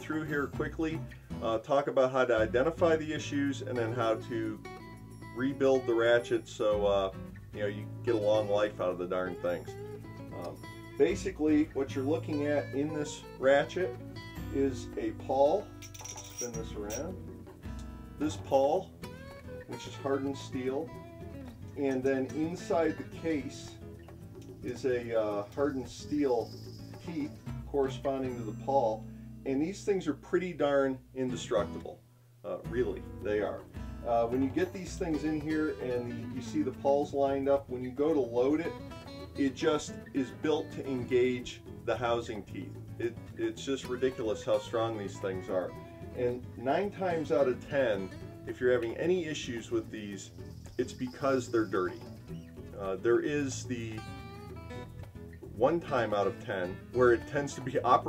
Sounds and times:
Speech: 0:00.0 - 0:04.6, 0:05.4 - 0:09.7, 0:10.3 - 0:15.7, 0:16.4 - 0:17.2, 0:18.2 - 0:18.9, 0:19.7 - 0:20.9, 0:21.8 - 0:23.8, 0:24.6 - 0:38.8, 0:39.4 - 0:52.1, 0:52.7 - 0:54.2, 0:55.5 - 0:58.0
Music: 0:00.0 - 0:58.0.

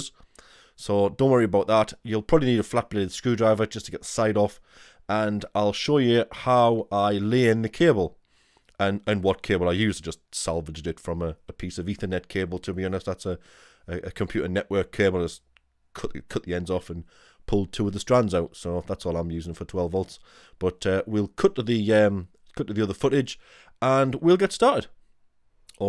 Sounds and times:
Speech: 0:00.8 - 0:08.2, 0:08.8 - 0:25.0.

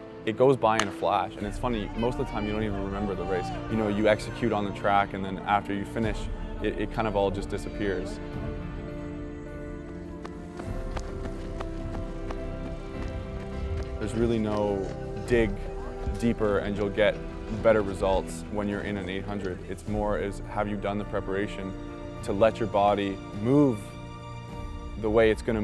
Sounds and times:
Music: 0:00.0 - 0:25.6
Speech: 0:00.3 - 0:08.2, 0:14.0 - 0:23.9, 0:25.0 - 0:25.6
Outside, urban or manmade: 0:08.1 - 0:17.6.

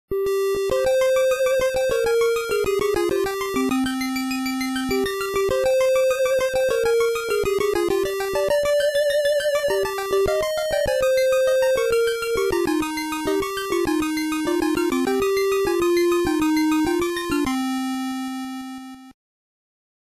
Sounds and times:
Video game music: 0:00.1 - 0:19.2.

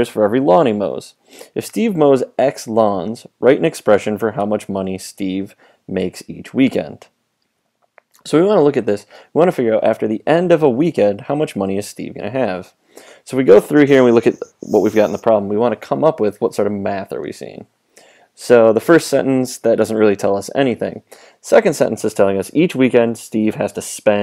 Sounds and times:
Speech: 0:00.0 - 0:07.2, 0:08.2 - 0:17.7, 0:18.4 - 0:24.2.

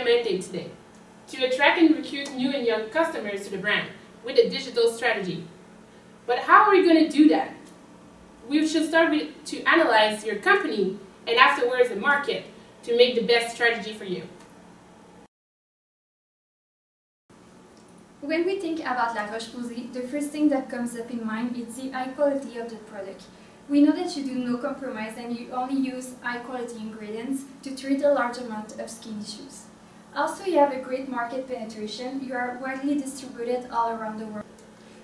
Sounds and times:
Speech: 0:00.0 - 0:05.6, 0:06.3 - 0:07.7, 0:08.4 - 0:14.4, 0:18.2 - 0:34.5.

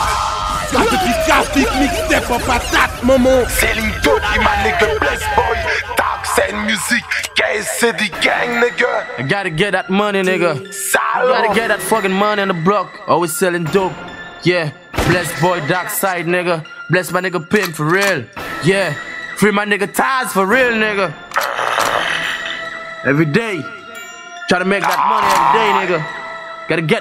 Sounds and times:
Music: 0:00.0 - 0:27.0.

